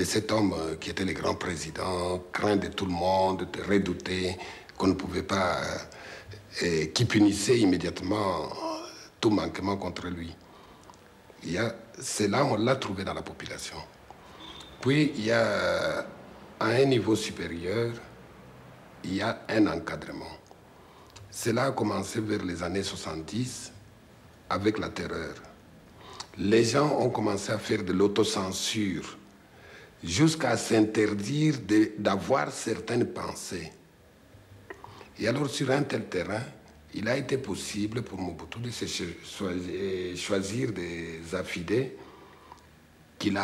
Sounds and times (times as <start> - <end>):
Speech: 0.0 - 10.4, 11.4 - 14.0, 14.8 - 18.1, 19.0 - 20.5, 21.2 - 23.8, 24.5 - 25.6, 26.2 - 29.3, 30.0 - 33.8, 35.2 - 42.0, 43.2 - 43.4
Inside, small room: 0.0 - 43.4.